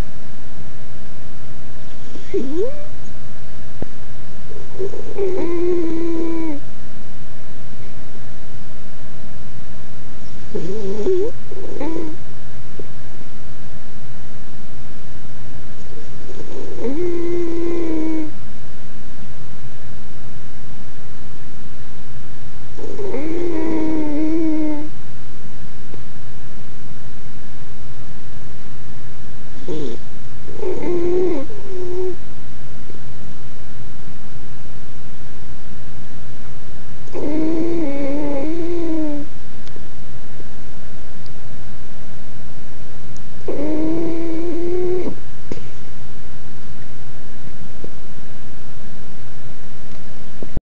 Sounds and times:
Dog: 0:01.9 - 0:03.2, 0:04.5 - 0:06.7, 0:10.4 - 0:12.2, 0:15.8 - 0:18.4, 0:22.7 - 0:24.9, 0:29.6 - 0:32.2, 0:37.1 - 0:39.3, 0:43.4 - 0:45.7.

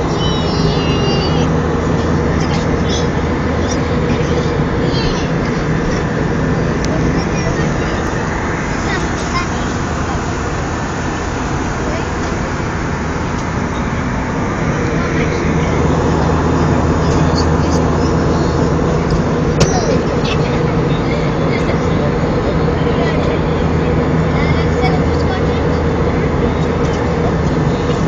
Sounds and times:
Speech: 0:00.1 - 0:06.1, 0:06.8 - 0:08.2, 0:08.8 - 0:10.4, 0:11.7 - 0:12.6, 0:14.7 - 0:28.0.

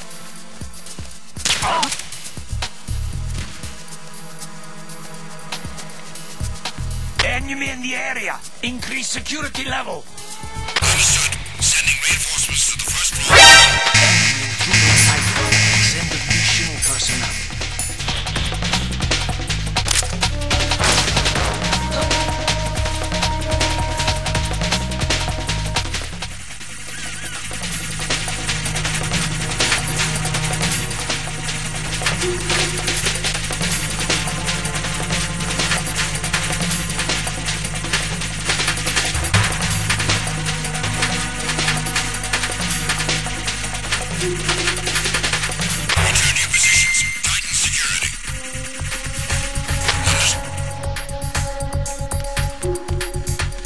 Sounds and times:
Music: 0:00.0 - 0:53.6
Speech: 0:07.2 - 0:10.1, 0:10.8 - 0:17.5, 0:46.1 - 0:48.3.

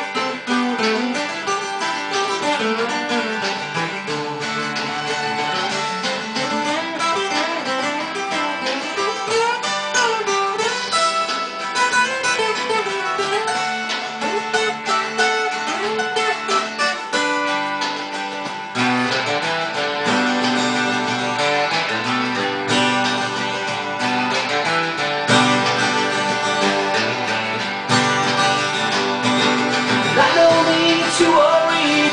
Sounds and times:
Rock and roll: 0:00.0 - 0:32.1.

